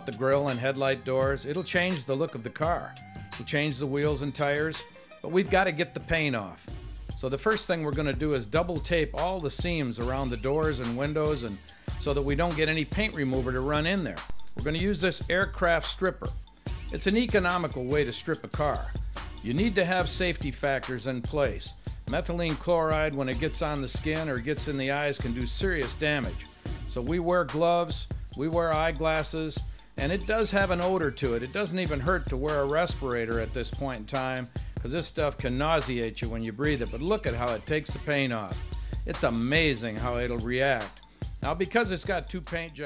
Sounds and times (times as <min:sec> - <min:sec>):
Speech: 0:00.0 - 0:16.3, 0:16.9 - 0:42.8
Music: 0:00.0 - 0:42.8.